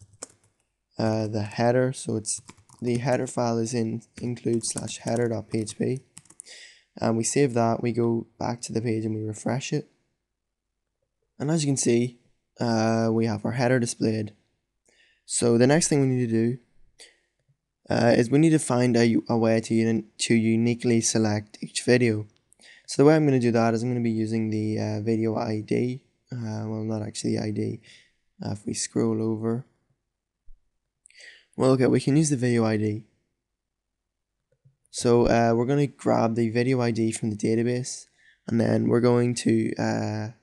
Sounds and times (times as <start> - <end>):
Speech: 1.0 - 9.9, 11.4 - 14.4, 15.3 - 16.6, 17.9 - 29.7, 31.1 - 33.1, 35.0 - 40.4.